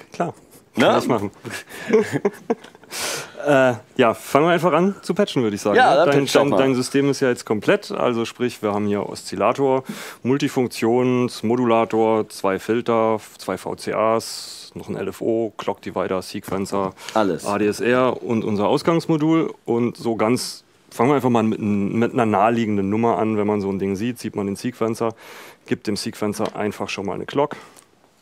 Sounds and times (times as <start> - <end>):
Speech: 0.1 - 1.4, 3.4 - 27.6.